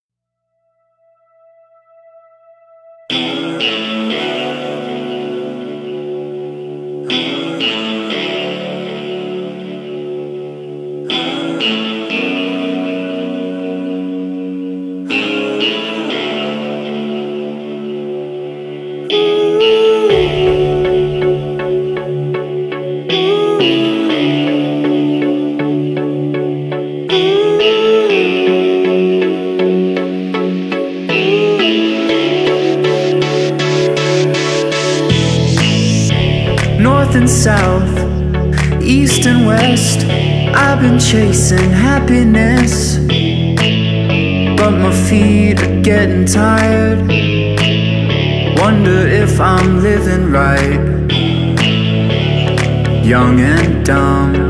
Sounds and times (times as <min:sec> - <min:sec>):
Music: 0:00.3 - 0:54.4.